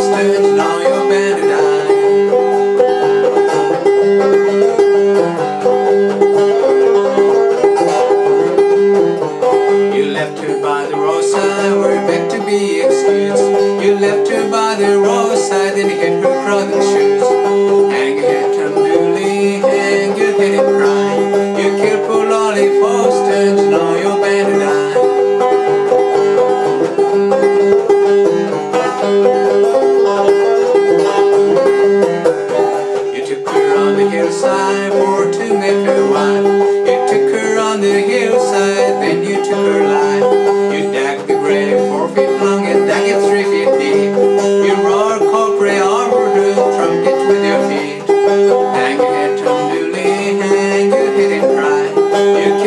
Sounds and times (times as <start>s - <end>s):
Male singing: 0.0s - 2.3s, 9.8s - 25.3s, 28.7s - 31.7s, 33.0s - 52.6s
Music: 0.0s - 52.6s.